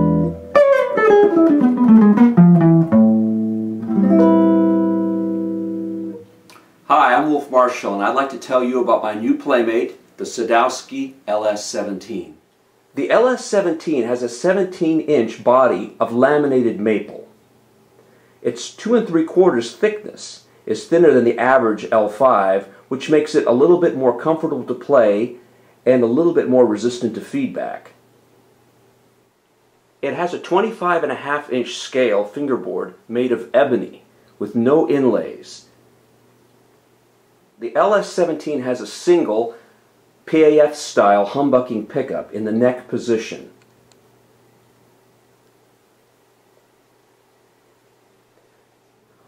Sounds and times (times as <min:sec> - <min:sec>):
Speech: 0:06.9 - 0:12.4, 0:13.0 - 0:17.3, 0:18.4 - 0:28.0, 0:30.0 - 0:35.7, 0:37.6 - 0:39.6, 0:40.2 - 0:43.6.